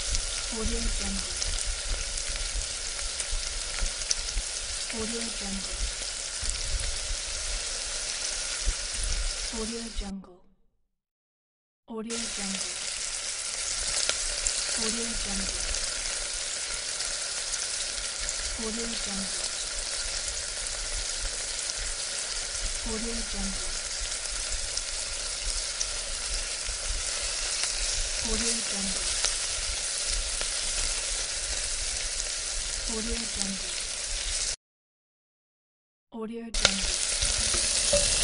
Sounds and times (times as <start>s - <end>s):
Frying (food): 0.0s - 10.0s, 12.1s - 34.6s, 36.6s - 38.2s
Sizzle: 0.0s - 10.0s, 12.1s - 34.6s, 36.6s - 38.2s
Speech: 0.5s - 1.4s, 4.9s - 5.9s, 9.6s - 10.5s, 11.9s - 12.8s, 14.8s - 15.7s, 18.6s - 19.5s, 22.8s - 23.8s, 28.2s - 29.1s, 32.9s - 33.8s, 36.2s - 37.0s.